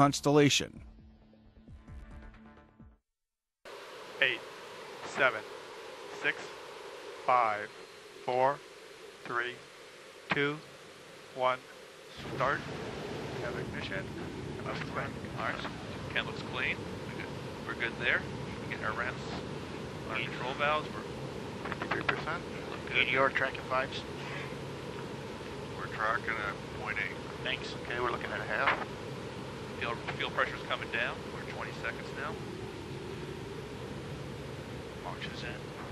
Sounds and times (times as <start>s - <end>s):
Speech: 0.0s - 0.8s, 5.1s - 5.4s, 6.2s - 6.5s, 7.3s - 7.7s, 8.3s - 8.6s, 9.3s - 9.6s, 10.3s - 10.6s, 11.4s - 11.6s, 12.2s - 12.6s, 13.4s - 14.1s, 14.7s - 19.4s, 20.1s - 21.0s, 21.7s - 24.5s, 25.8s - 28.8s, 29.8s - 32.4s, 35.0s - 35.7s.